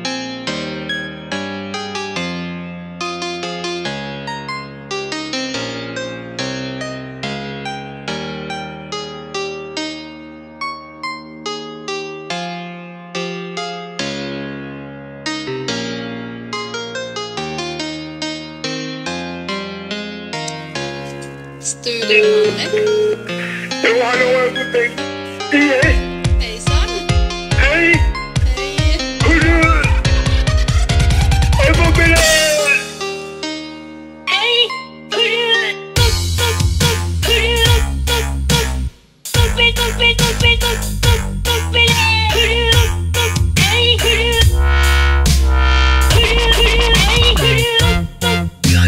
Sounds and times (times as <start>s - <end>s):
Speech: 21.6s - 23.1s, 23.7s - 30.0s, 31.6s - 32.9s, 34.3s - 35.8s, 37.2s - 37.8s, 39.4s - 40.8s, 41.7s - 42.9s, 43.6s - 44.5s, 46.2s - 47.9s.